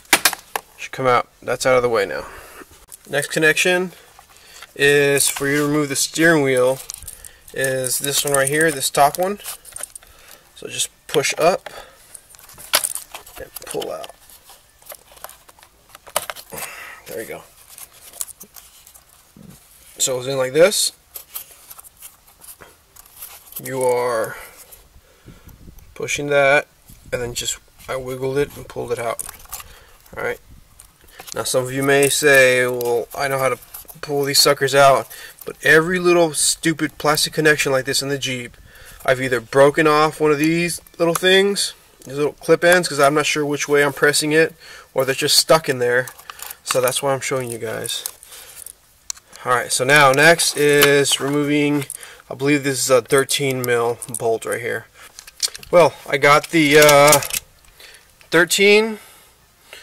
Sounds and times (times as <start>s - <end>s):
Speech: 0.8s - 2.3s, 3.1s - 4.0s, 4.8s - 6.8s, 7.6s - 9.4s, 10.6s - 11.6s, 13.4s - 14.1s, 17.0s - 17.5s, 19.4s - 21.0s, 23.6s - 24.5s, 26.0s - 29.2s, 30.2s - 30.4s, 31.4s - 48.1s, 49.4s - 54.9s, 55.7s - 57.3s, 58.3s - 59.0s.